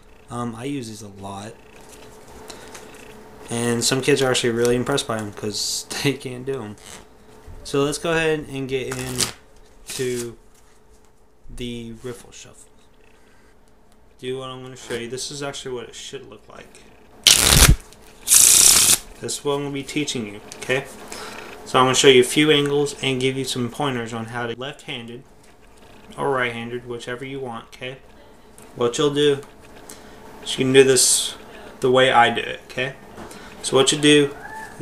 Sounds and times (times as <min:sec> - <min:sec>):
Speech: 0:00.3 - 0:01.6, 0:03.5 - 0:06.8, 0:07.6 - 0:09.3, 0:09.9 - 0:10.4, 0:11.5 - 0:12.7, 0:14.2 - 0:16.8, 0:19.2 - 0:20.9, 0:21.7 - 0:25.3, 0:26.2 - 0:29.5, 0:30.5 - 0:33.0, 0:33.6 - 0:34.8
Shuffling cards: 0:17.3 - 0:19.0.